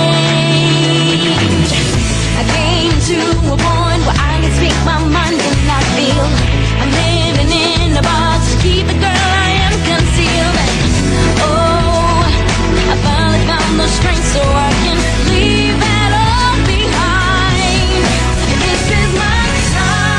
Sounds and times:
Jazz: 0:00.0 - 0:20.1
Soundtrack music: 0:00.0 - 0:20.1.

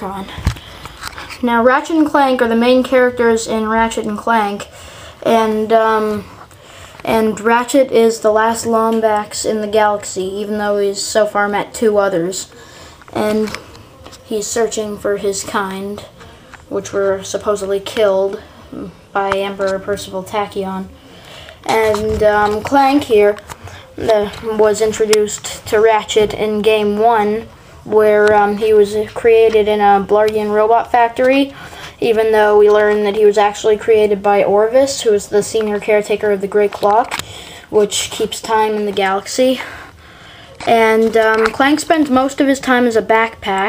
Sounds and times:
Speech: 0:00.0 - 0:00.5, 0:01.3 - 0:06.4, 0:07.0 - 0:39.8, 0:40.6 - 0:43.6.

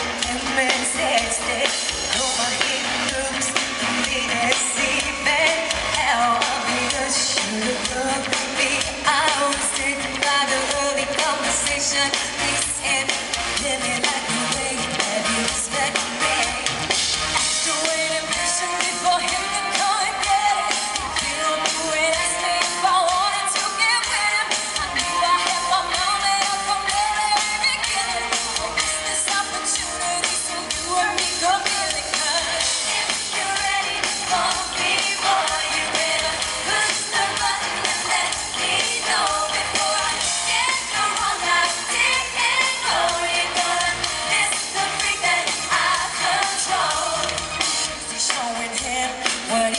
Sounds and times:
Music: 0:00.0 - 0:49.7.

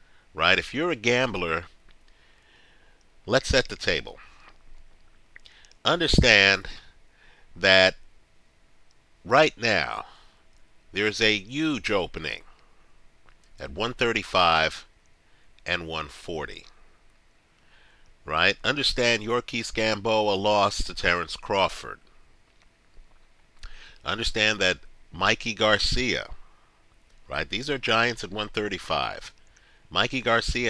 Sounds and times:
Inside, small room: 0:00.0 - 0:30.6
Speech: 0:00.4 - 0:01.7, 0:03.3 - 0:04.3, 0:05.8 - 0:06.9, 0:07.6 - 0:08.0, 0:09.3 - 0:10.2, 0:11.0 - 0:12.5, 0:13.6 - 0:14.9, 0:15.6 - 0:16.7, 0:18.3 - 0:22.1, 0:24.0 - 0:26.4, 0:27.3 - 0:30.6.

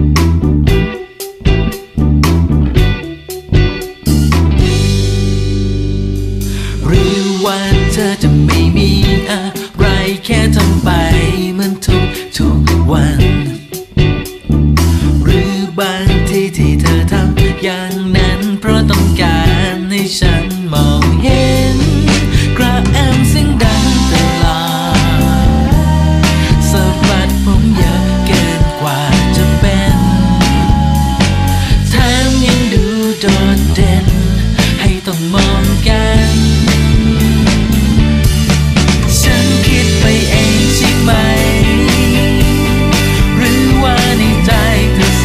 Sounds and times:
Music: 0:00.0 - 0:45.2.

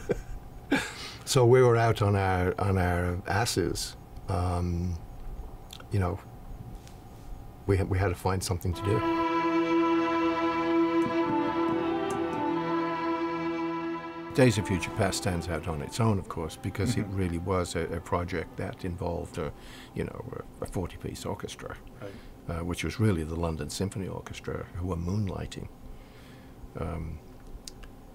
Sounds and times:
Cello: 0:08.7 - 0:19.6.

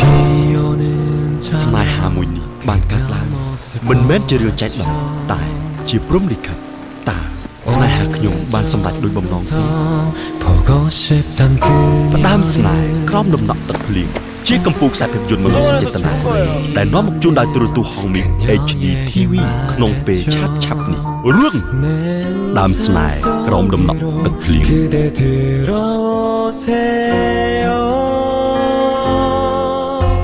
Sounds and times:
Music: 0:00.0 - 0:30.2
Speech: 0:01.4 - 0:09.6, 0:12.2 - 0:21.8, 0:22.5 - 0:25.0.

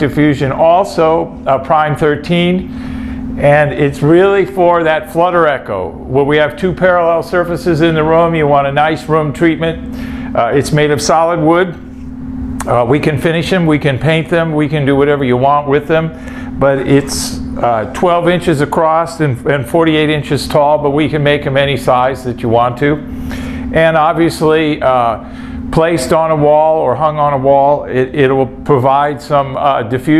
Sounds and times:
Speech: 0:00.0 - 0:02.7, 0:03.4 - 0:11.8, 0:12.6 - 0:23.1, 0:23.7 - 0:30.1.

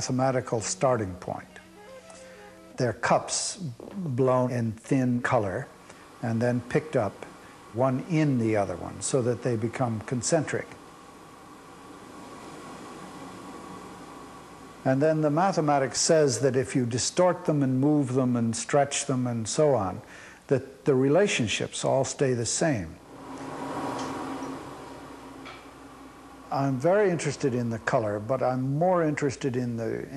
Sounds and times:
Speech: 0:00.0 - 0:01.6, 0:02.8 - 0:10.8, 0:14.9 - 0:23.0, 0:26.6 - 0:30.1.

